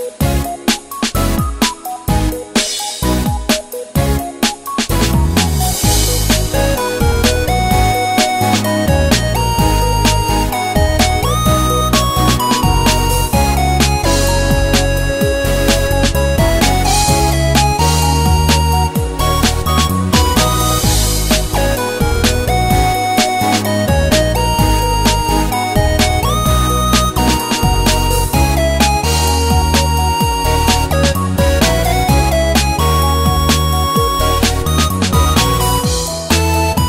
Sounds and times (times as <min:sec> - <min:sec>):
Music: 0:00.0 - 0:36.8.